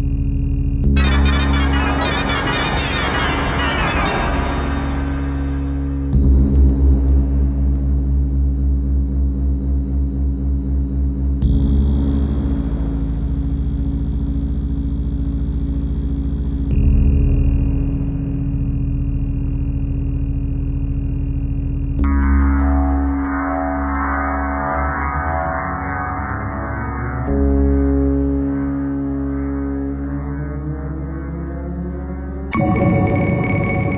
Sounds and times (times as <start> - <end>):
Ambient music: 0.0 - 17.0, 22.0 - 33.9.